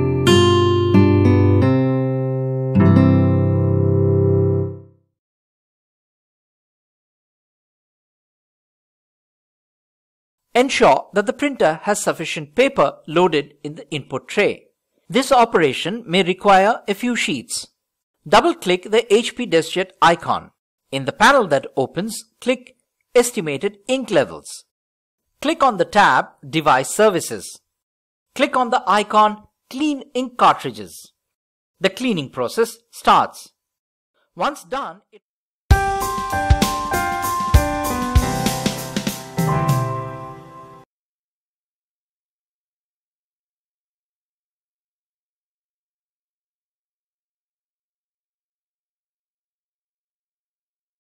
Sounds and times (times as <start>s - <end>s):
Music: 0.0s - 5.1s, 35.7s - 40.9s
Speech: 10.6s - 24.7s, 25.4s - 27.7s, 28.4s - 31.2s, 31.8s - 33.6s, 34.4s - 35.2s.